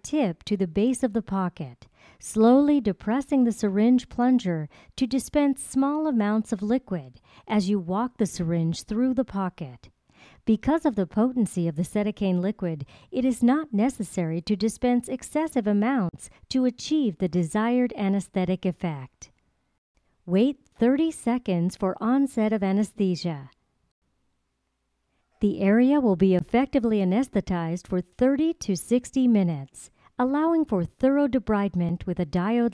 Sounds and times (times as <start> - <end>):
Speech: 0.0 - 9.9, 10.5 - 19.3, 20.3 - 23.6, 25.4 - 32.7.